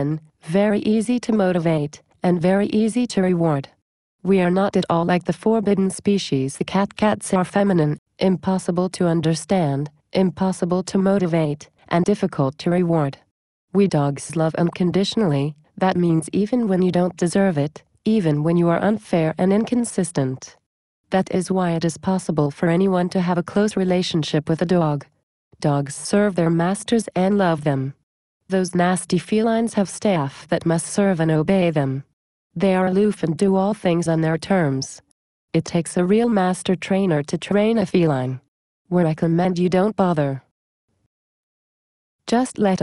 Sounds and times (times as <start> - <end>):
Speech: 0.0 - 40.5, 42.3 - 42.8.